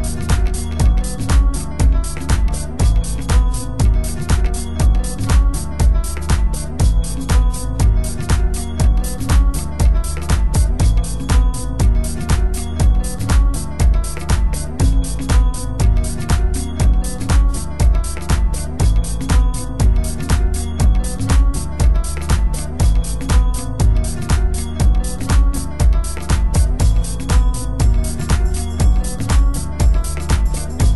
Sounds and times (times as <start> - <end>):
House music: 0.0 - 30.9.